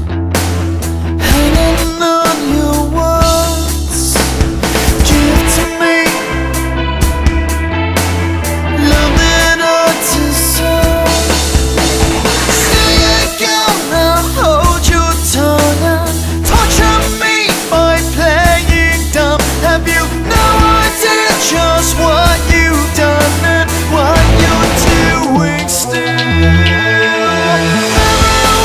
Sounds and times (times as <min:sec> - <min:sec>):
Music: 0:00.0 - 0:28.6.